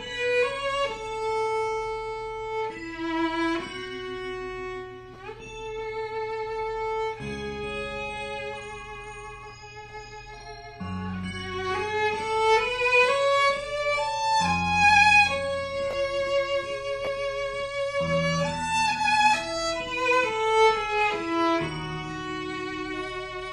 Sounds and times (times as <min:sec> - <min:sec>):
Violin, fiddle: 0:00.0 - 0:23.5.